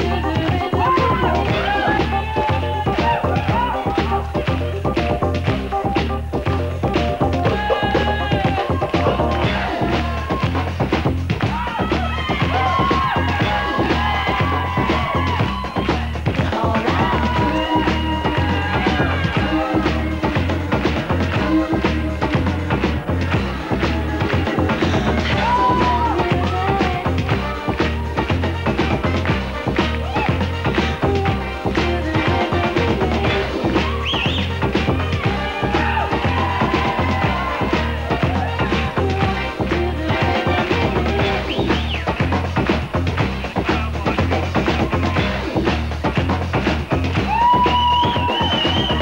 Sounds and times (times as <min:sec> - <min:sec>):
Music: 0:00.0 - 0:49.0.